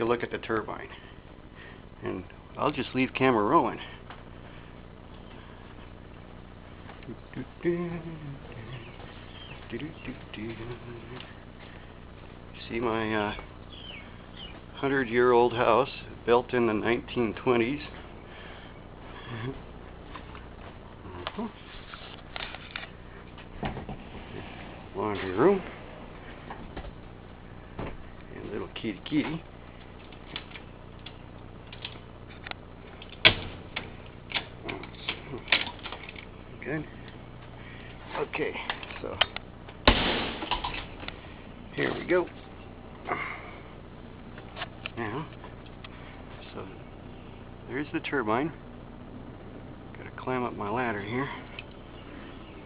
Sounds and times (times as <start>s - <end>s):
Speech: 0.0s - 1.0s, 2.0s - 4.0s, 9.7s - 11.3s, 12.6s - 13.5s, 14.8s - 18.0s, 25.0s - 25.8s, 28.3s - 29.5s, 36.6s - 37.0s, 38.1s - 39.3s, 41.7s - 42.4s, 44.9s - 45.4s, 46.4s - 46.8s, 47.7s - 48.6s, 49.9s - 51.5s.